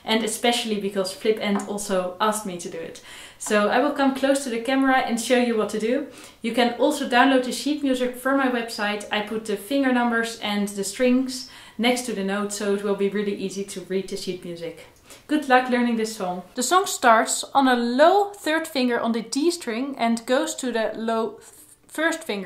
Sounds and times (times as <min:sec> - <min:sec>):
Speech: 0:00.0 - 0:22.4.